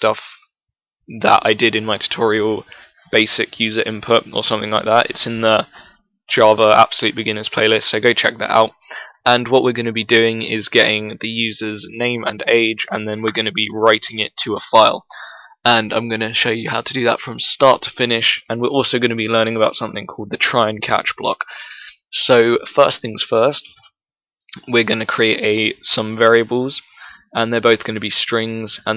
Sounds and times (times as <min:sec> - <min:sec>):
Speech: 0:00.0 - 0:00.4, 0:01.1 - 0:23.8, 0:24.6 - 0:28.9.